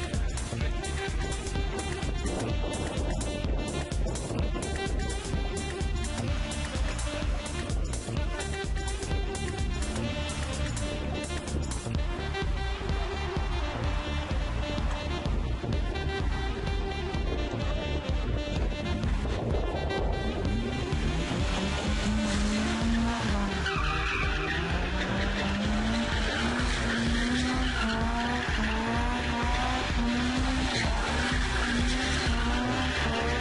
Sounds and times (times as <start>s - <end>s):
Music: 0.0s - 33.4s.